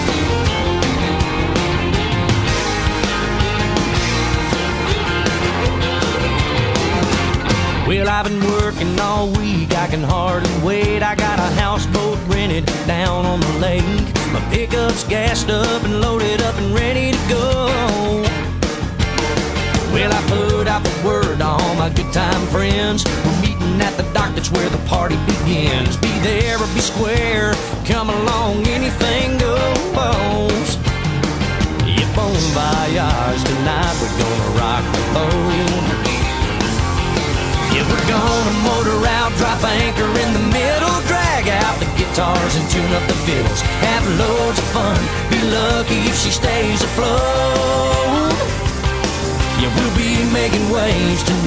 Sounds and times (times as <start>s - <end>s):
Music: 0.0s - 51.4s.